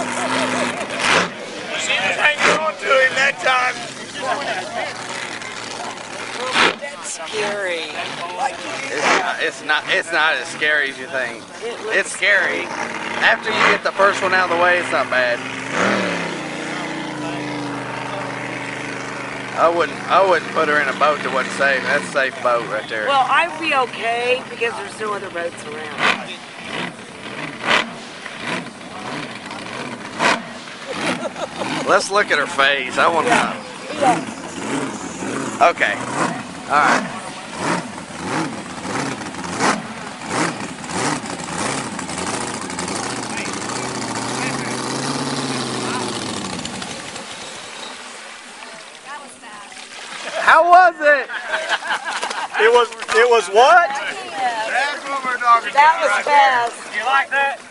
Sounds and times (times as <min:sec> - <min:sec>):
Motorboat, speedboat: 0:00.0 - 0:57.7.